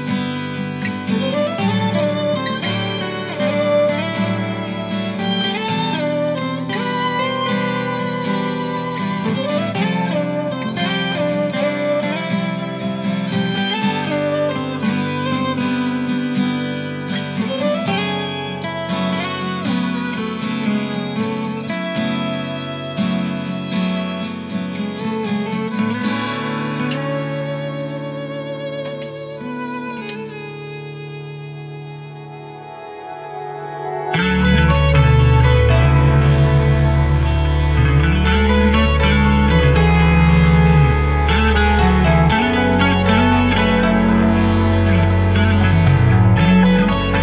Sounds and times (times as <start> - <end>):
Music: 0.0 - 47.2.